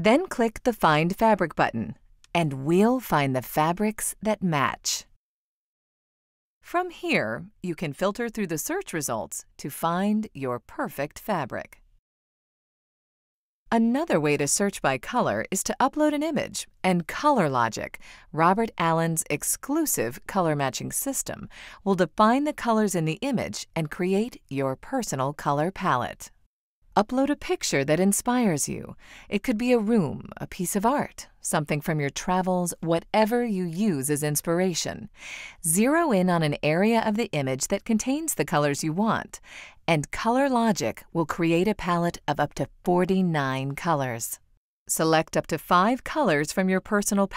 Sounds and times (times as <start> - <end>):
Speech: 0.0 - 5.1, 6.7 - 11.8, 13.8 - 26.3, 27.0 - 47.3.